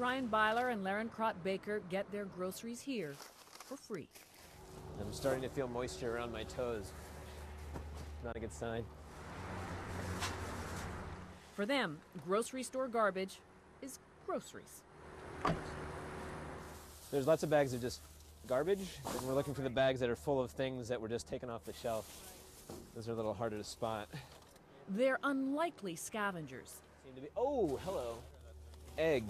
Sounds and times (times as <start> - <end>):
Speech: 5.0 - 6.9, 8.3 - 8.9, 17.1 - 22.4, 25.0 - 29.3.